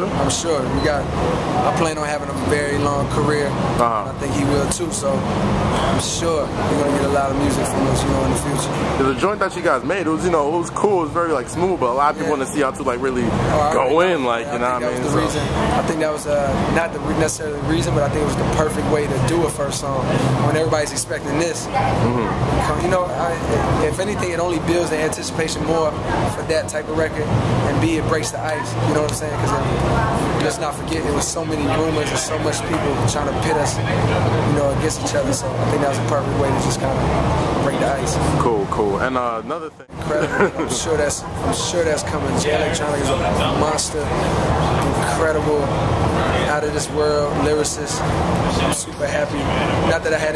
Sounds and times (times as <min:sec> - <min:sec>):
Speech: 0:00.0 - 0:50.3.